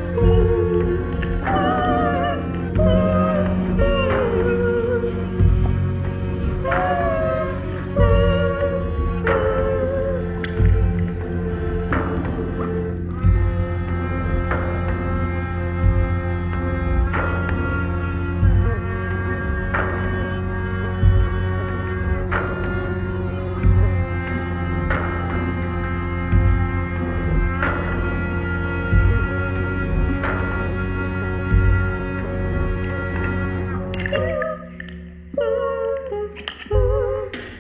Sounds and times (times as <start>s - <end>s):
Music: 0.0s - 37.6s.